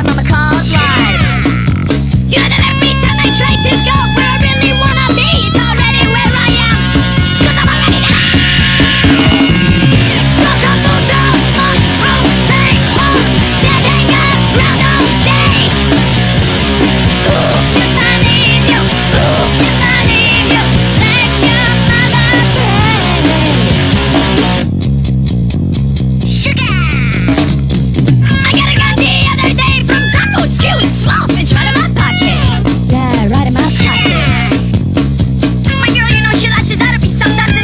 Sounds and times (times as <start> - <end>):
Funny music: 0.0 - 37.6.